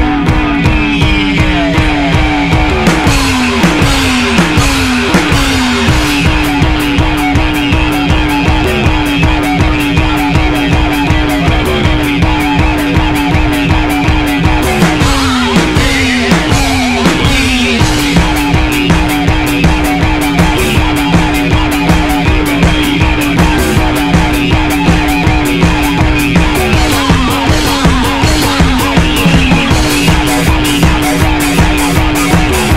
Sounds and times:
Punk rock: 0.0 - 32.7.

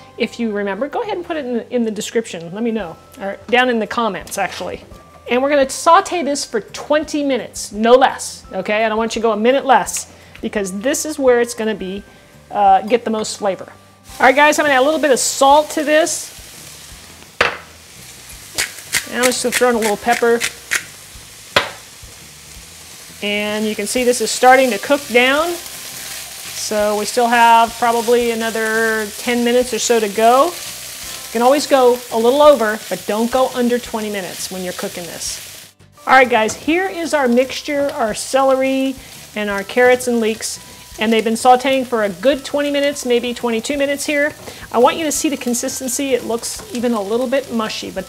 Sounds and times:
Sizzle: 0.2 - 48.0.

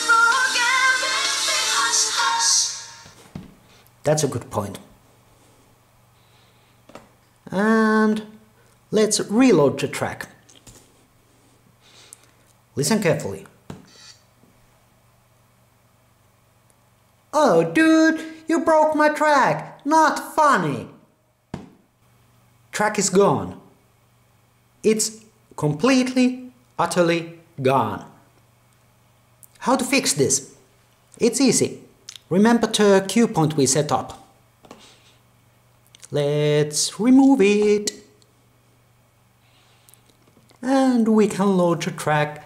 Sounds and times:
Speech: 4.0 - 5.0, 7.4 - 10.4, 12.7 - 13.6, 17.3 - 21.1, 22.7 - 23.7, 24.8 - 28.3, 29.6 - 30.6, 31.2 - 34.4, 36.0 - 38.2, 40.6 - 42.4.

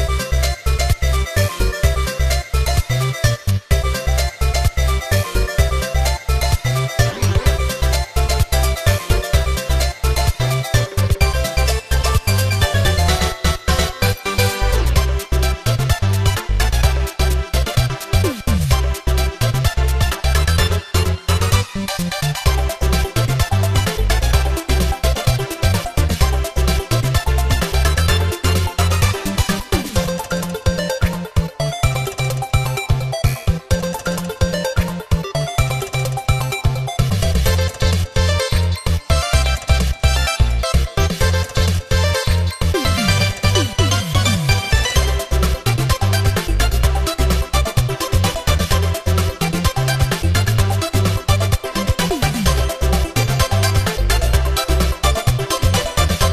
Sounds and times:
Music: 0.0 - 56.3.

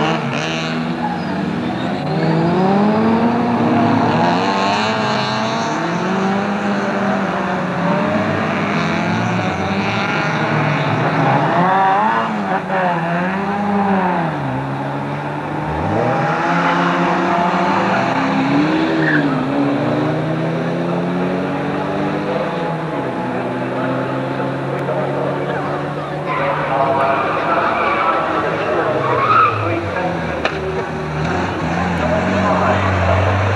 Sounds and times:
Car: 0.0 - 33.5.

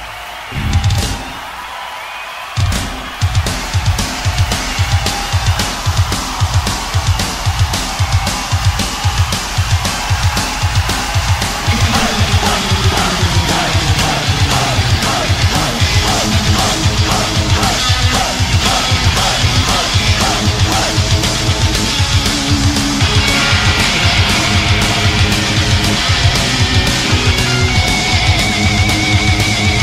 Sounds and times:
Music: 0.0 - 29.8.

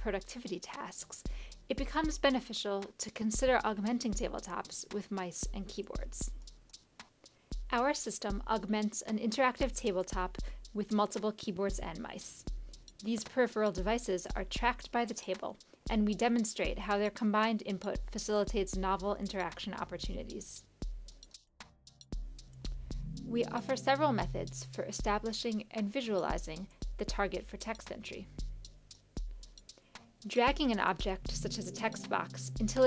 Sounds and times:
Speech: 0.0 - 6.3, 7.7 - 12.4, 13.0 - 20.6, 23.3 - 28.3, 30.3 - 32.8
Music: 0.0 - 32.8.

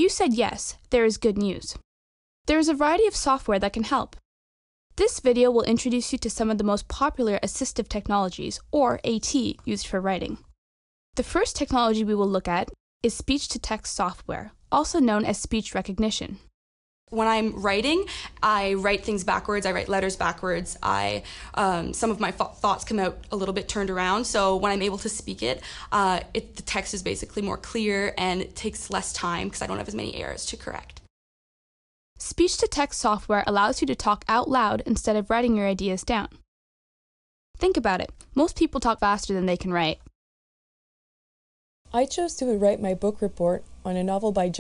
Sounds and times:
Speech: 0.0 - 1.8, 2.5 - 4.2, 5.0 - 10.4, 11.2 - 16.4, 17.2 - 31.0, 32.2 - 36.4, 37.6 - 40.1, 41.9 - 44.6.

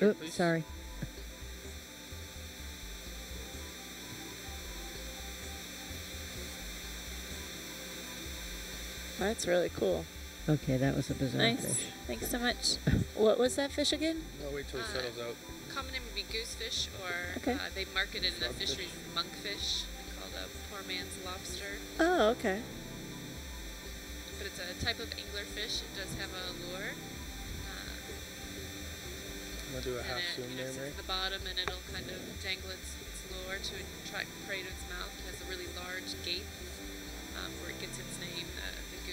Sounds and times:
Speech: 9.2 - 22.7, 24.4 - 26.9, 29.7 - 36.5, 37.4 - 39.1.

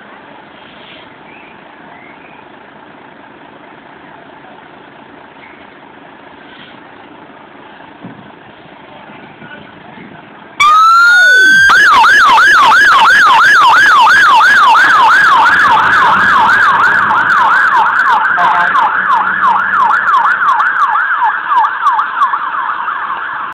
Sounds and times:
Fire engine, fire truck (siren): 10.6 - 23.5.

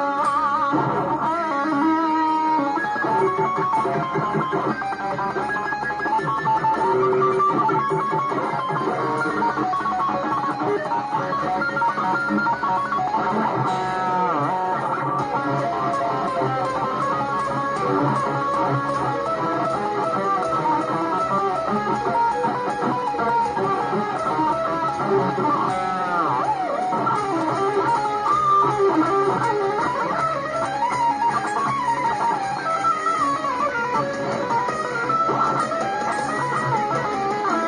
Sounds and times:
Bass guitar: 0.0 - 37.6.

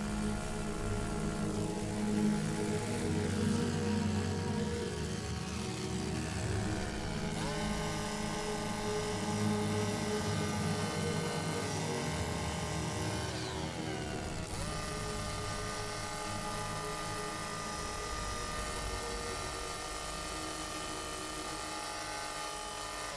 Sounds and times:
Music: 0.0 - 23.1
Outside, urban or manmade: 0.0 - 23.1.

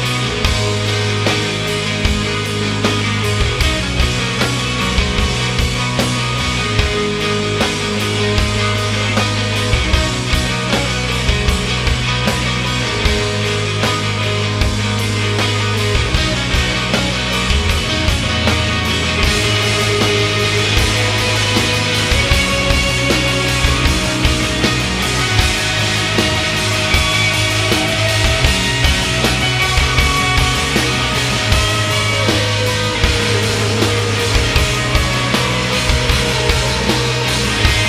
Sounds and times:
Grunge: 0.0 - 37.8.

